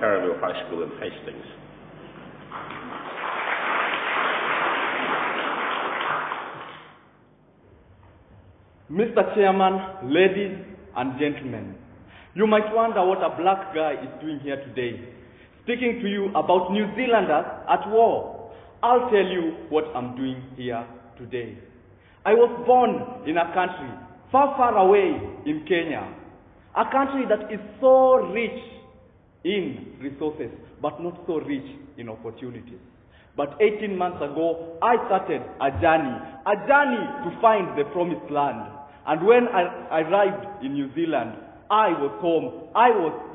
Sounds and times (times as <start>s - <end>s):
Male speech, man speaking: 0.0s - 1.6s, 8.9s - 11.8s, 12.4s - 15.0s, 15.7s - 21.6s, 22.2s - 26.2s, 26.8s - 28.8s, 29.5s - 32.8s, 33.4s - 43.3s
Narration, monologue: 0.0s - 2.4s, 7.0s - 43.3s.